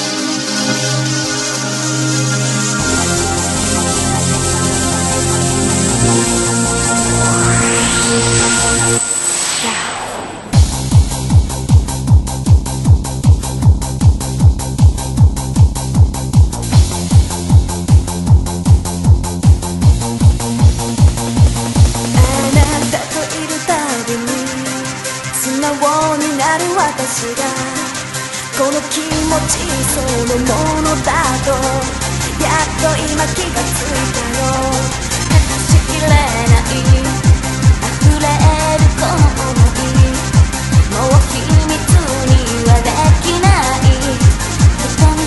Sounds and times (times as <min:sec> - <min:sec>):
Techno: 0:00.0 - 0:45.2.